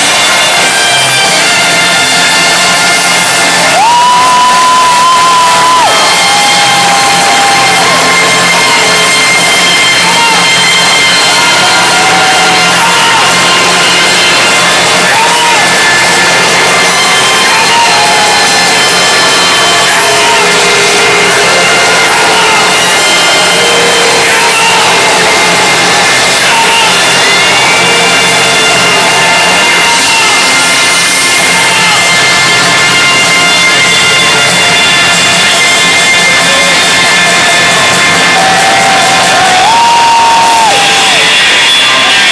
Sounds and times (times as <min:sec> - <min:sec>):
Music: 0:00.0 - 0:42.3
Whoop: 0:03.6 - 0:09.1, 0:09.9 - 0:16.2, 0:38.2 - 0:42.2
Yell: 0:09.8 - 0:32.1.